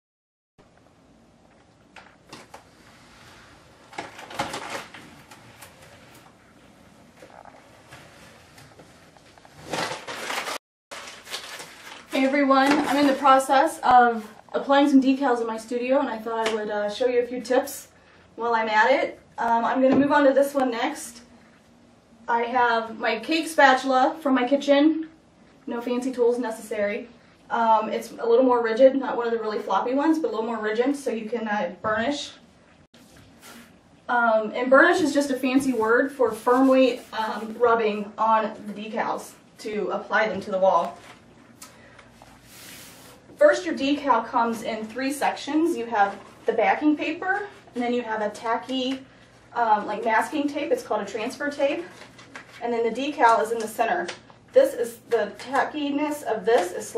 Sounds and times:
Inside, small room: 0.6s - 56.9s
Speech: 12.1s - 21.3s, 22.3s - 32.4s, 34.1s - 41.0s, 43.4s - 52.0s, 52.6s - 56.9s.

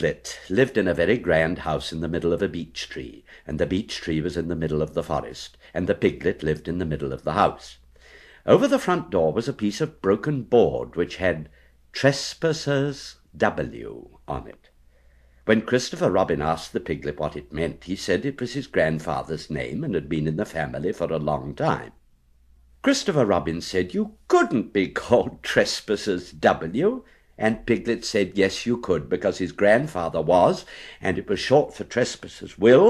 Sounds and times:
Speech: 0.0s - 7.8s, 8.4s - 14.7s, 15.5s - 22.0s, 22.8s - 32.9s.

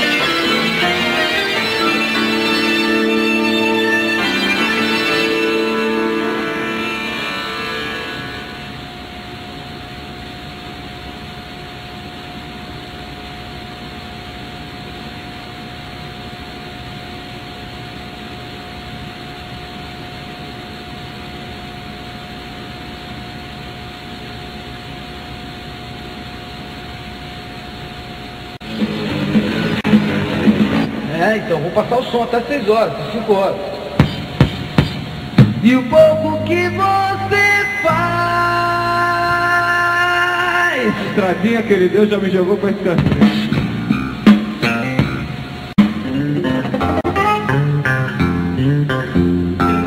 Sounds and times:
Music: 0.0s - 8.9s, 28.6s - 49.8s
Speech: 31.1s - 33.8s, 40.6s - 43.5s.

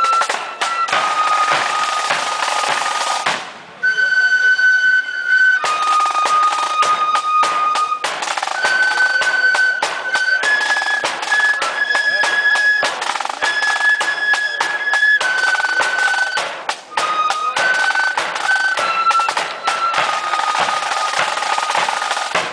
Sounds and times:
Flute: 0.0s - 22.5s.

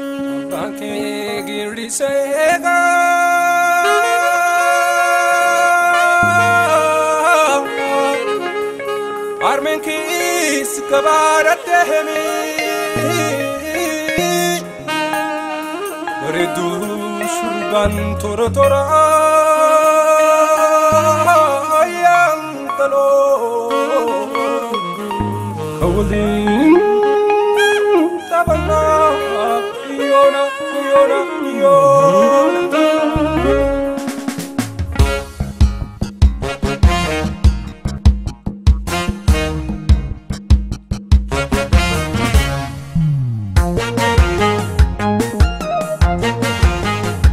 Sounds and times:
Jazz: 0.0s - 47.3s.

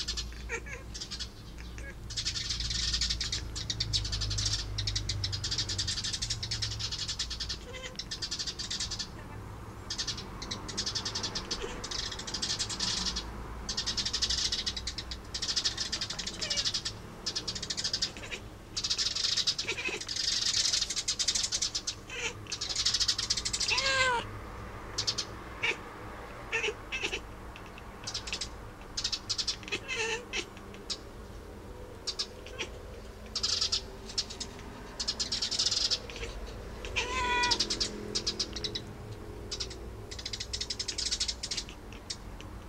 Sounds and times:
Meow: 0.5s - 0.9s, 7.6s - 8.0s, 18.1s - 18.4s, 19.6s - 20.0s, 22.1s - 22.4s, 23.6s - 24.3s, 25.6s - 25.8s, 26.5s - 27.2s, 29.7s - 30.5s, 32.5s - 32.7s, 36.1s - 37.7s.

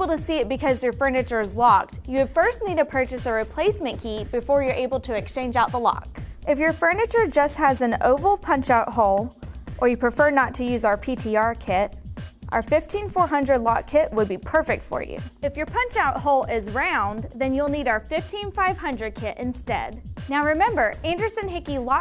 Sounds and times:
Speech: 0.0s - 11.9s, 12.5s - 22.0s
Music: 0.0s - 22.0s.

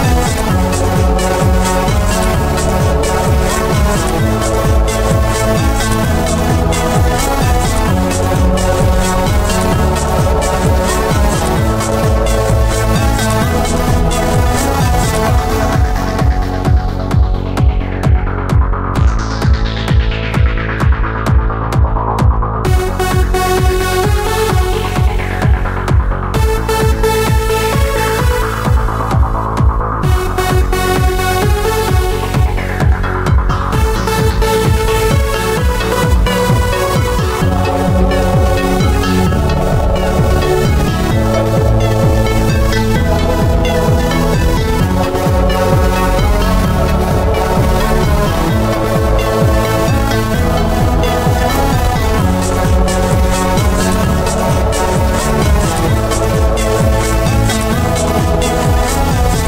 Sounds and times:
Music: 0.0s - 59.4s.

